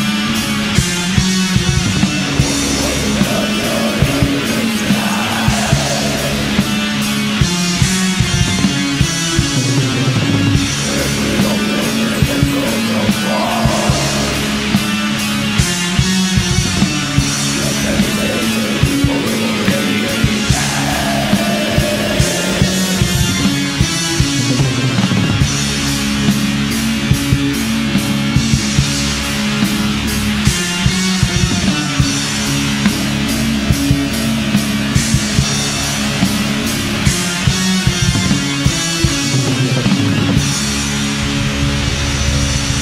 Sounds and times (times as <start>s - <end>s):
Heavy metal: 0.0s - 42.8s.